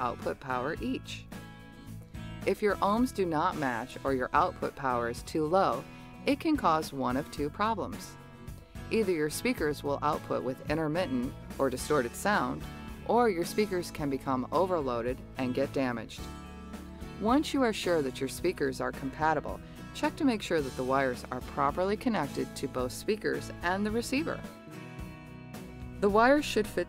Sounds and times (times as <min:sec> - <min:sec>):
Speech: 0:00.0 - 0:01.2, 0:02.5 - 0:08.1, 0:09.0 - 0:16.3, 0:17.2 - 0:24.4, 0:26.0 - 0:26.8
Music: 0:00.0 - 0:26.8.